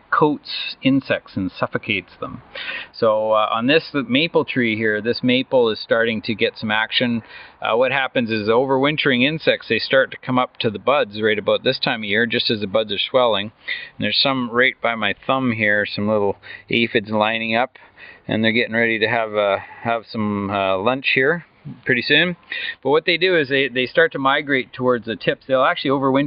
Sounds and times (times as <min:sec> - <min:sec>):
Speech: 0:00.0 - 0:26.2.